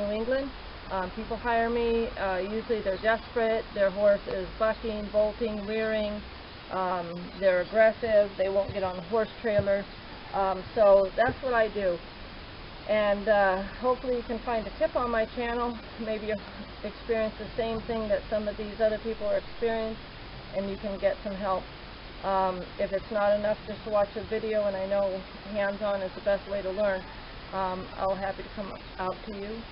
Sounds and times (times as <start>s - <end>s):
Speech: 0.0s - 12.0s, 12.9s - 20.0s, 20.6s - 21.6s, 22.2s - 27.0s, 27.6s - 29.7s.